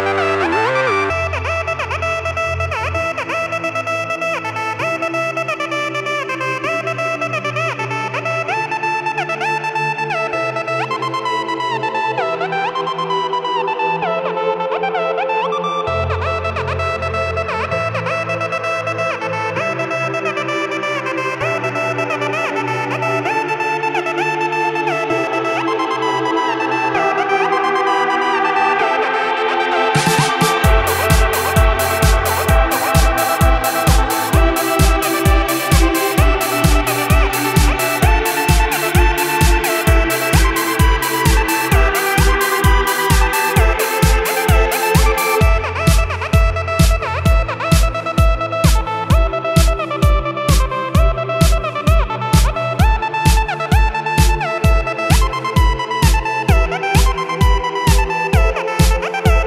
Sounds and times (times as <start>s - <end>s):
Electronica: 0.0s - 59.4s.